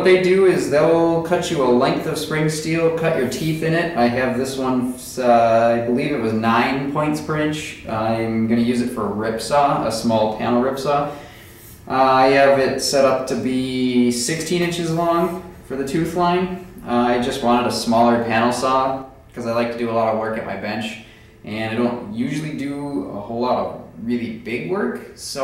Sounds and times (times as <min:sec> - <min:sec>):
Speech: 0:00.0 - 0:11.2, 0:11.9 - 0:25.4.